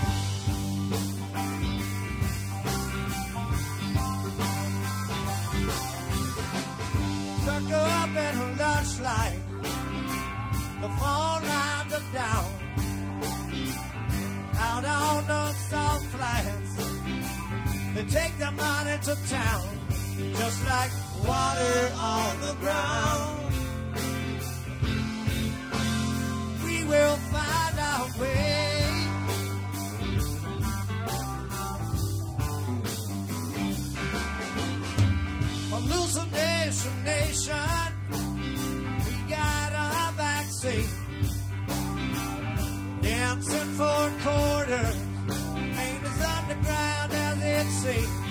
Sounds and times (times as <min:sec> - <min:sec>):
Music: 0:00.0 - 0:48.3.